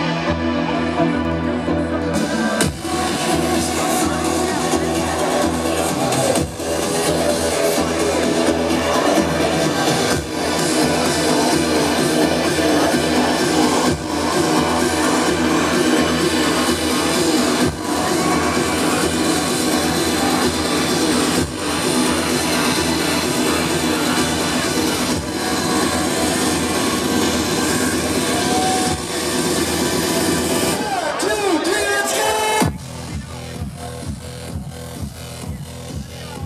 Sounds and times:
Music: 0.0 - 36.4.

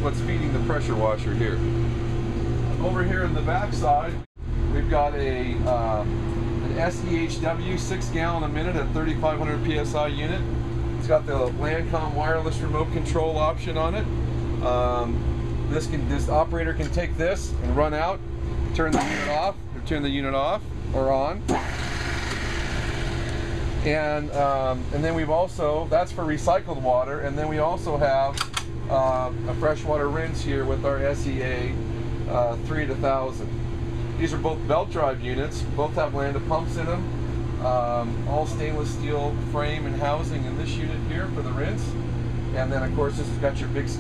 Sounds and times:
Speech: 0.0 - 1.6, 2.8 - 18.2, 18.8 - 21.5, 23.8 - 33.5, 34.2 - 44.0.

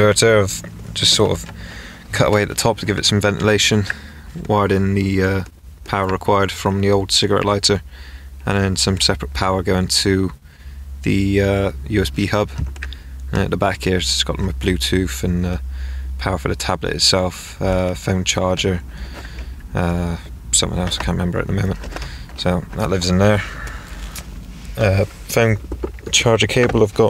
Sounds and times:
Speech: 0.0 - 1.5, 2.1 - 7.8, 8.4 - 10.4, 11.0 - 12.6, 13.3 - 15.6, 16.2 - 18.8, 19.7 - 21.8, 22.4 - 23.5, 24.8 - 27.1.

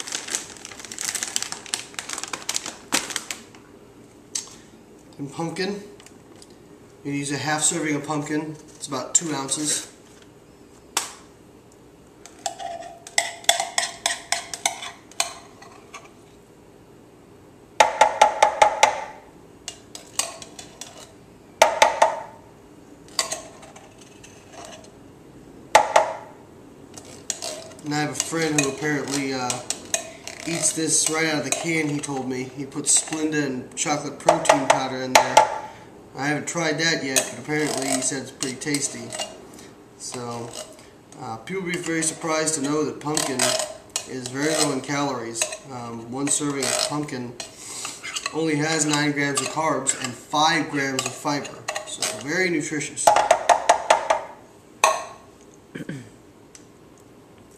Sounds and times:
Speech: 5.2 - 6.0, 7.1 - 10.0, 27.8 - 29.7, 30.5 - 35.4, 36.2 - 39.2, 40.0 - 47.4, 48.3 - 53.1.

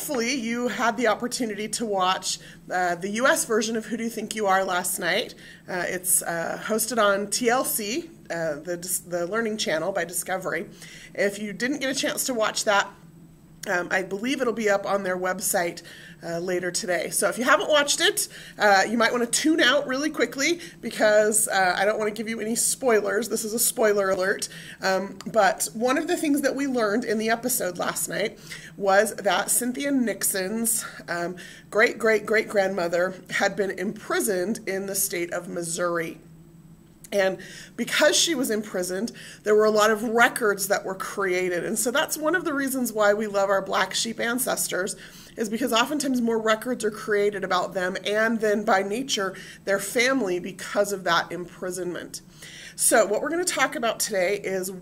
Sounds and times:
Speech: 0.0 - 13.0, 13.6 - 36.2, 37.1 - 52.2, 52.8 - 54.8.

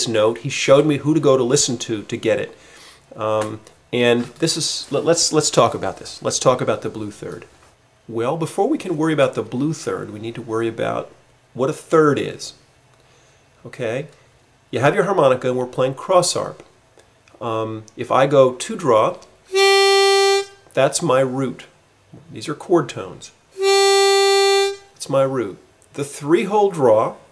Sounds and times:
Speech: 0.0 - 2.6, 3.2 - 7.5, 8.1 - 12.6, 13.6 - 16.7, 17.4 - 19.3, 20.8 - 23.4, 25.0 - 27.3
Harmonica: 19.5 - 20.6, 23.6 - 25.0
Wind instrument, woodwind instrument: 19.5 - 20.6, 23.6 - 24.9
Blues: 23.6 - 25.0.

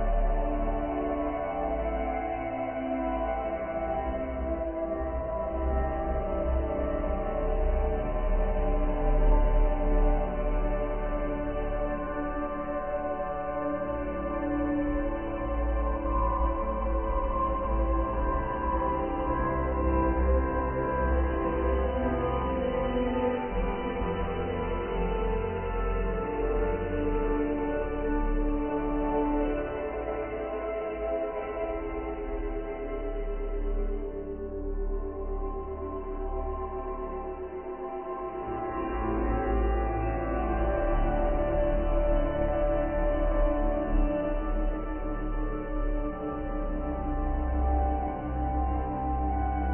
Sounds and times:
Music: 0.0 - 49.7.

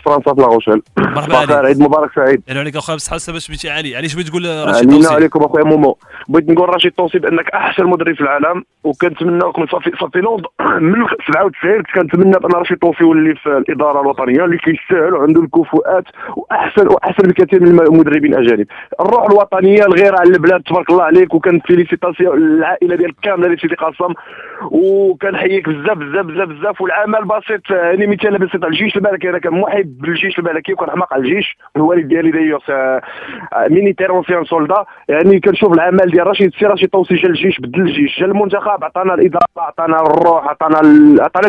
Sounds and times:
Speech: 0.0 - 41.4.

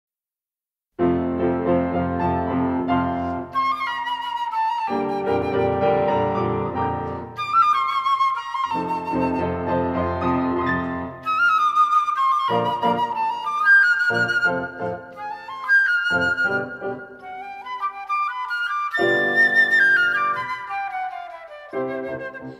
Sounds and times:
Classical music: 1.0 - 22.5
Flute: 2.1 - 22.5.

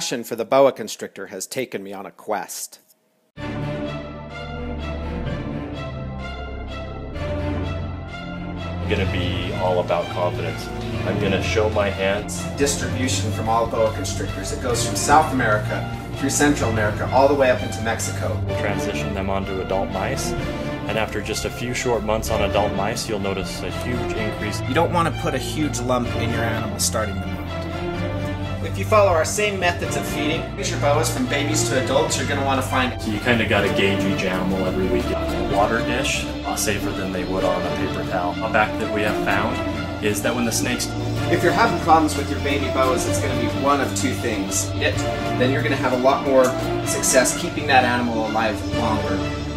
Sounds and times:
Speech: 0.0 - 2.9, 8.9 - 27.2, 28.6 - 49.3
Music: 3.4 - 49.5.

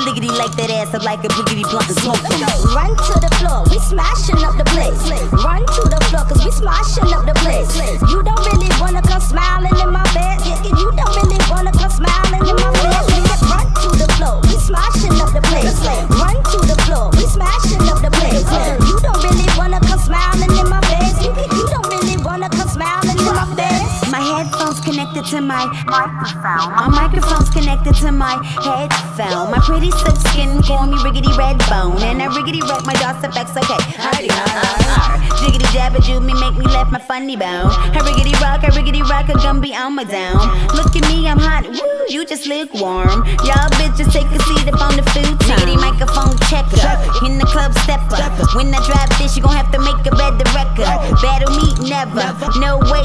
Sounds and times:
Hip hop music: 0.0 - 53.0
Rapping: 0.0 - 53.0.

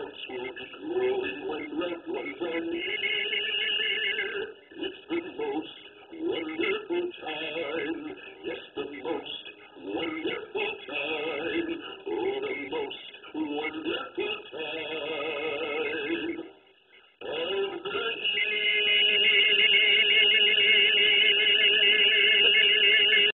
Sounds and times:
Male singing: 0.0 - 16.5, 17.2 - 23.3
Music: 0.0 - 23.3.

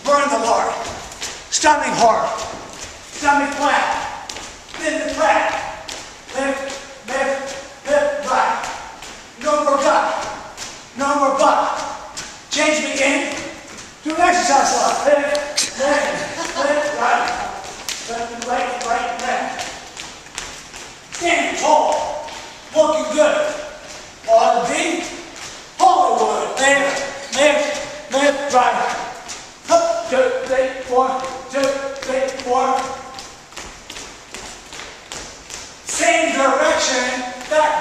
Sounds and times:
Speech: 0.0 - 2.6, 3.2 - 19.8, 21.2 - 33.2, 35.9 - 37.8
Run: 0.0 - 37.8.

